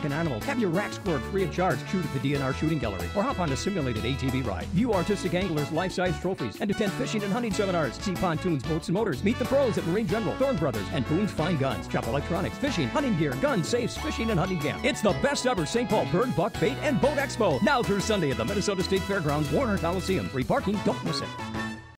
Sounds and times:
Speech: 0.0 - 21.4
Music: 0.0 - 21.9.

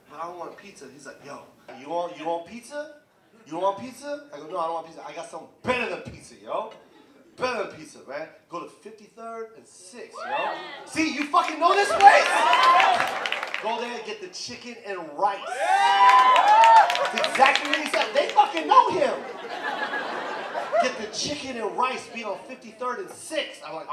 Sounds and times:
Speech: 0.1 - 6.8, 7.4 - 10.3, 10.9 - 12.4, 13.6 - 15.4, 17.2 - 19.2, 20.8 - 23.9.

